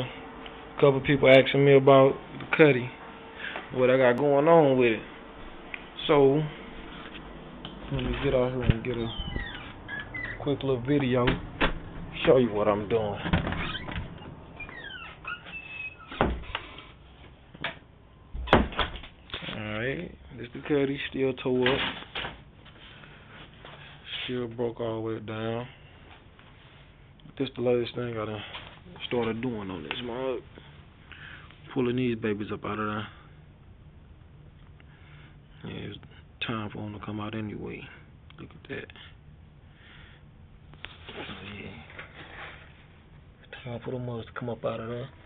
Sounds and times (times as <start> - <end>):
Speech: 0.8 - 3.0, 3.7 - 5.1, 6.0 - 6.6, 7.9 - 9.2, 10.4 - 11.4, 12.2 - 13.3, 19.4 - 22.0, 24.1 - 25.8, 27.3 - 30.5, 31.7 - 33.2, 35.6 - 39.1, 41.1 - 42.0, 43.5 - 45.2.